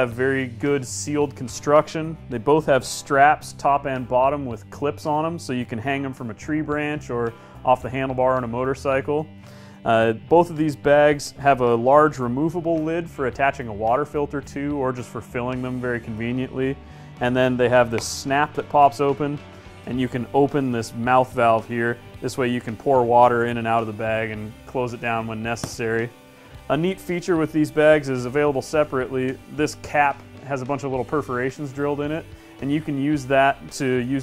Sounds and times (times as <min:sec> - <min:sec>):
Speech: 0:00.0 - 0:26.1, 0:26.7 - 0:34.2
Music: 0:00.0 - 0:34.2.